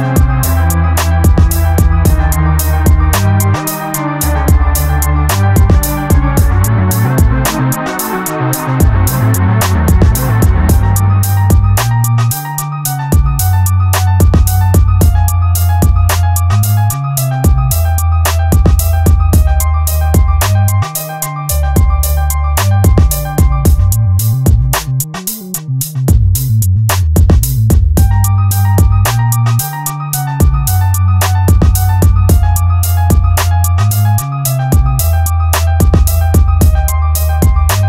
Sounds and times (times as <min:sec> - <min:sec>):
Video game music: 0:00.0 - 0:25.6, 0:28.0 - 0:37.8.